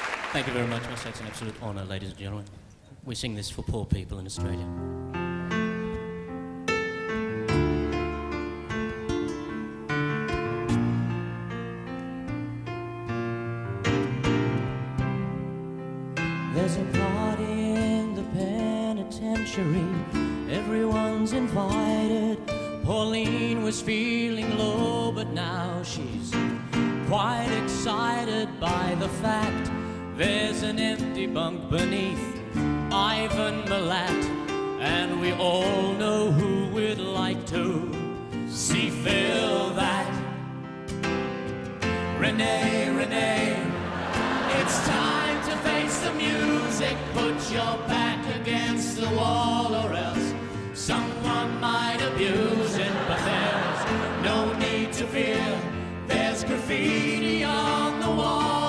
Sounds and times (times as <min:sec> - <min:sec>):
Music: 0:00.0 - 0:02.8, 0:04.2 - 0:58.6.